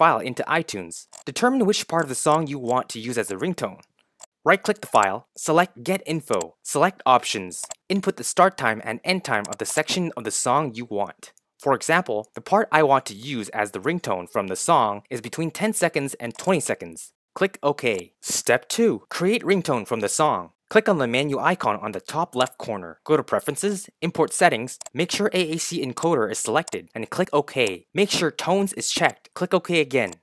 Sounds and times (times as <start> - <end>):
Speech: 0.0 - 3.8, 4.5 - 30.2.